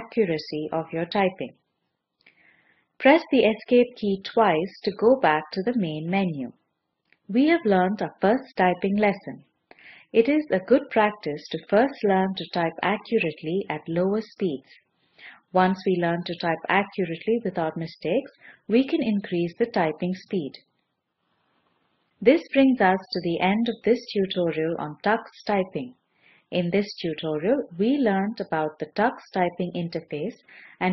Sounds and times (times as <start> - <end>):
Speech: 0.0 - 1.6, 3.0 - 6.6, 7.3 - 9.4, 10.1 - 14.8, 15.5 - 20.6, 22.2 - 30.9.